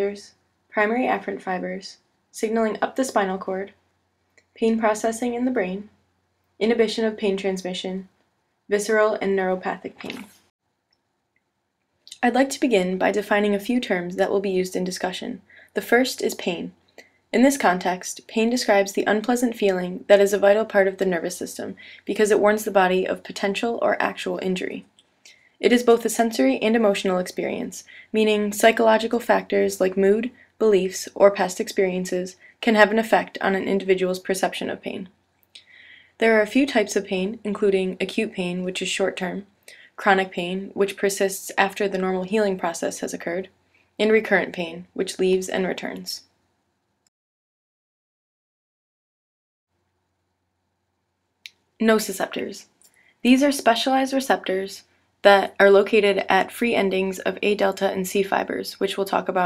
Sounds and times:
Speech: 0.0s - 3.8s, 4.6s - 6.0s, 6.6s - 10.4s, 12.1s - 16.8s, 17.4s - 46.3s, 51.8s - 59.4s.

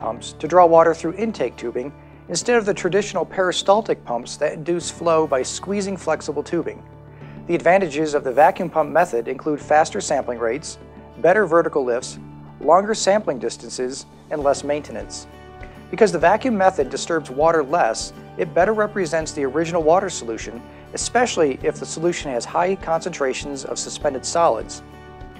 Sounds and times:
Speech: 0.0s - 6.8s, 7.5s - 15.3s, 15.9s - 24.8s
Music: 0.0s - 25.3s.

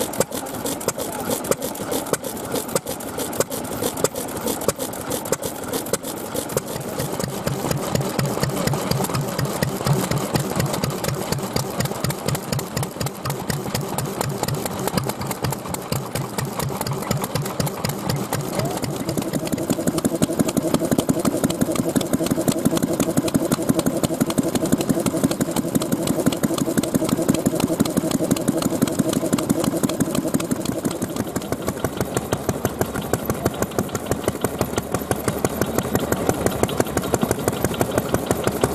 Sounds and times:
Idling: 0.0s - 38.7s.

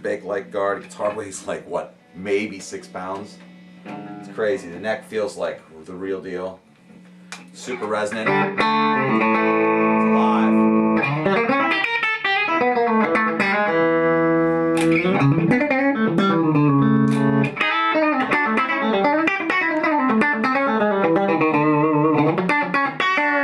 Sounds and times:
Music: 0.0s - 5.3s, 7.7s - 23.4s.

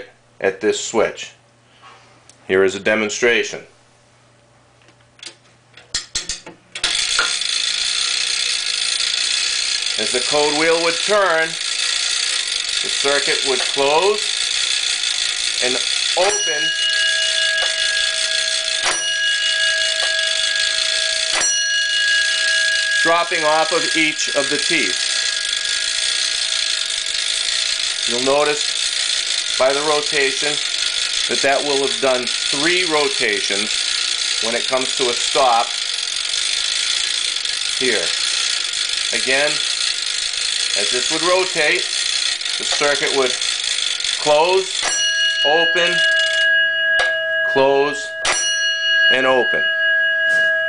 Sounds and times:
Speech: 0.0s - 1.4s, 2.5s - 3.7s, 12.9s - 14.3s, 39.2s - 39.6s, 40.8s - 41.9s, 42.6s - 43.4s, 49.2s - 49.6s
Alarm: 6.8s - 50.6s.

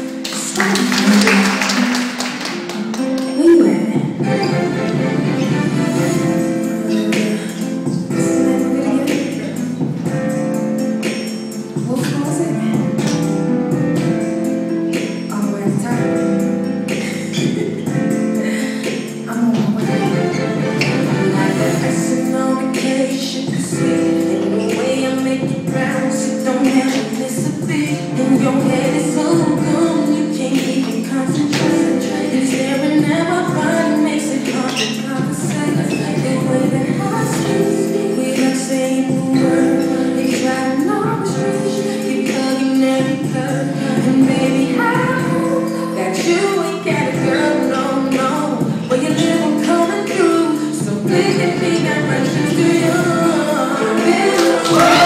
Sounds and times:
Music: 0.0s - 55.0s.

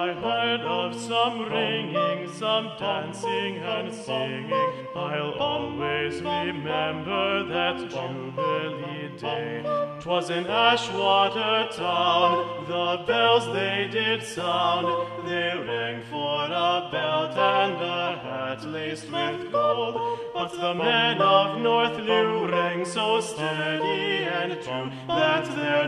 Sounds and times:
Choir: 0.0s - 25.8s.

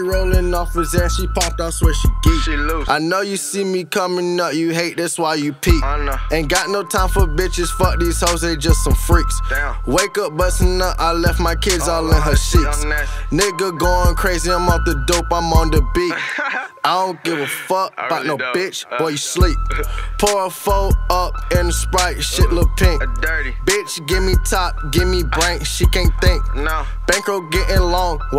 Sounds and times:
Music: 0.0s - 28.3s.

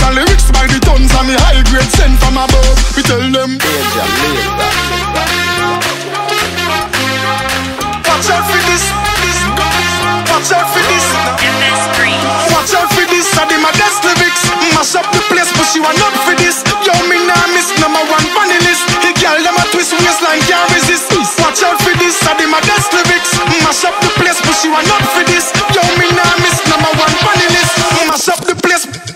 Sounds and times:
Music: 0.0s - 29.1s.

